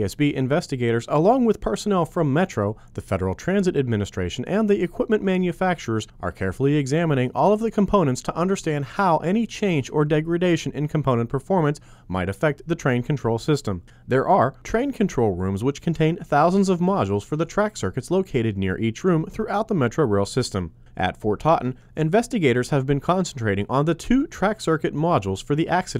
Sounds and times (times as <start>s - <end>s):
Speech: 0.0s - 25.9s.